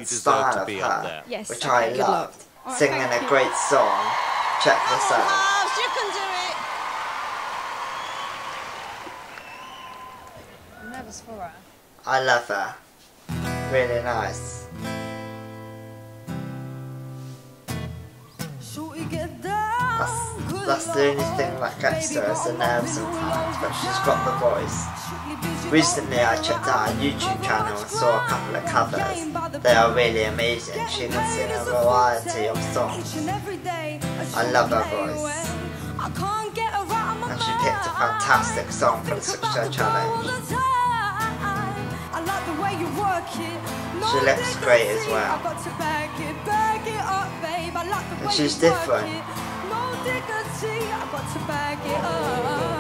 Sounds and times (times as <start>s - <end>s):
Music: 13.3s - 52.8s.